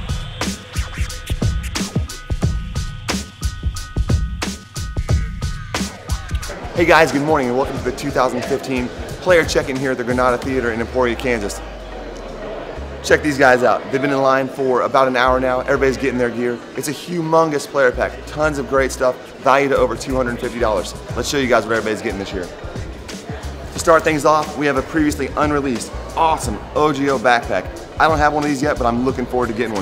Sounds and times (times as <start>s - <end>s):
Music: 0.0s - 29.8s
Speech: 6.8s - 11.7s, 13.0s - 29.8s.